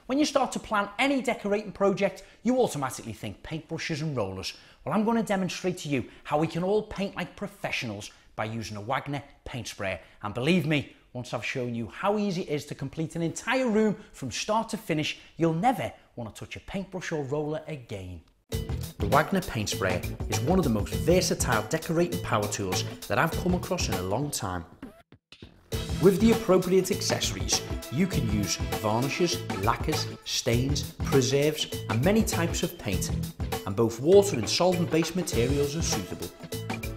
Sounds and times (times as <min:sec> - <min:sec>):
Speech: 0:00.1 - 0:18.3, 0:19.0 - 0:24.7, 0:26.0 - 0:36.4.